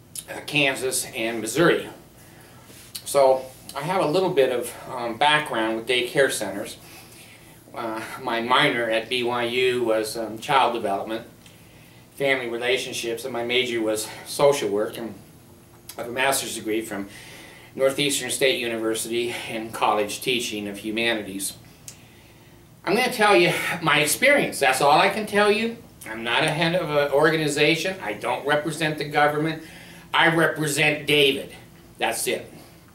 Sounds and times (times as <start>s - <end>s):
Speech: 0.2s - 2.0s, 3.0s - 6.8s, 7.7s - 11.3s, 12.2s - 15.2s, 15.9s - 17.1s, 17.8s - 21.6s, 22.8s - 32.6s.